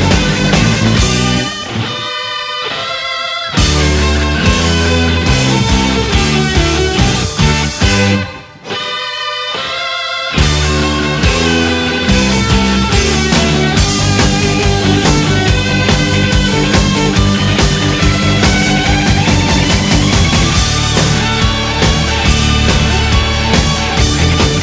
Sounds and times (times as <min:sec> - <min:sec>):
Electric guitar: 0:00.0 - 0:24.6
Theme music: 0:03.5 - 0:24.6
Soundtrack music: 0:03.6 - 0:24.6
Strum: 0:10.4 - 0:24.6
Dance music: 0:11.2 - 0:24.6.